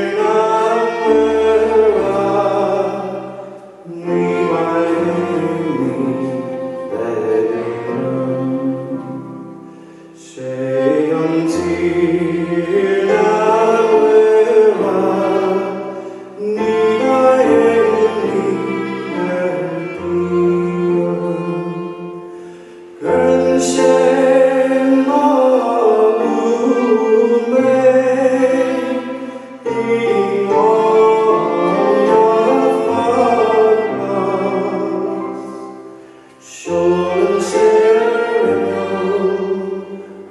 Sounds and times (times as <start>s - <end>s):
Violin, fiddle: 0.0s - 40.3s.